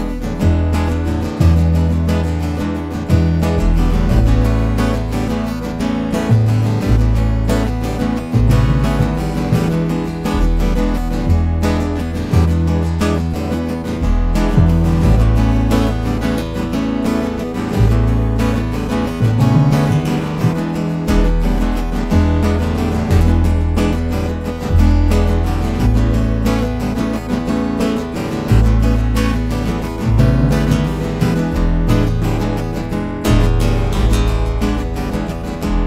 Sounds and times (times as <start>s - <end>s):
Music: 0.0s - 35.8s.